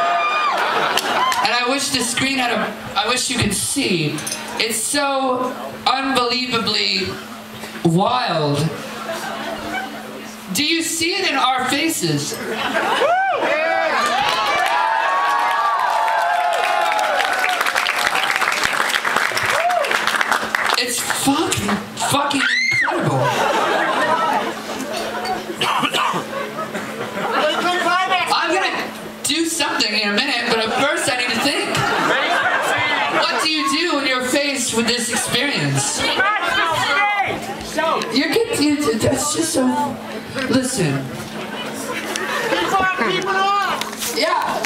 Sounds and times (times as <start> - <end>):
Hubbub, speech noise, speech babble: 0.0 - 18.7, 20.8 - 44.6.